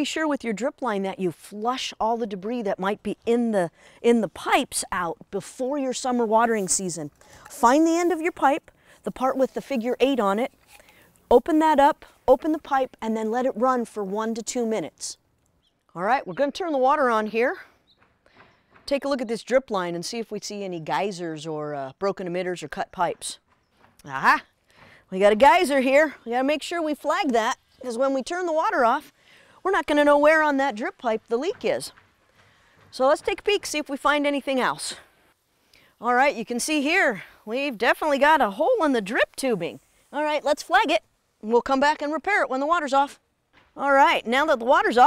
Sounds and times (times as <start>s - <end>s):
Speech: 0.0s - 10.5s, 11.3s - 15.2s, 16.0s - 17.6s, 18.9s - 23.4s, 24.0s - 24.4s, 25.1s - 29.1s, 29.7s - 31.9s, 32.9s - 35.0s, 36.0s - 43.2s, 43.8s - 45.0s.